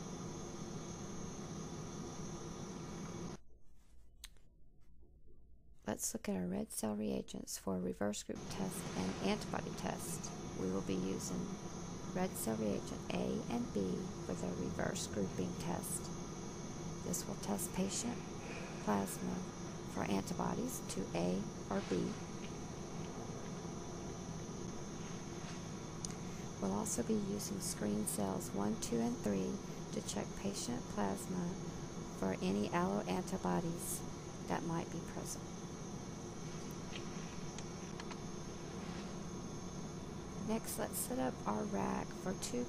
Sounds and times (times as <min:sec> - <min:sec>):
Speech: 0:05.9 - 0:11.6, 0:12.2 - 0:16.0, 0:17.1 - 0:18.2, 0:18.8 - 0:22.2, 0:26.6 - 0:31.6, 0:32.2 - 0:35.4, 0:40.5 - 0:42.6.